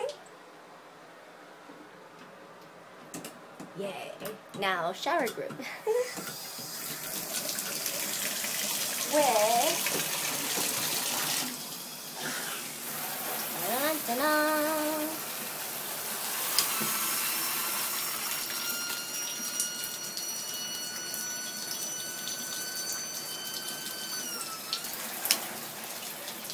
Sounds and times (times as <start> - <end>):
Bathtub (filling or washing): 5.9 - 26.5.